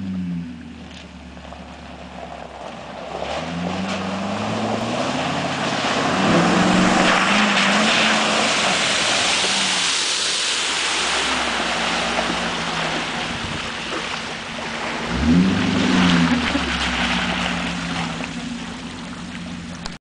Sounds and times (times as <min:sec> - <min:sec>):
Truck: 0:00.0 - 0:20.0.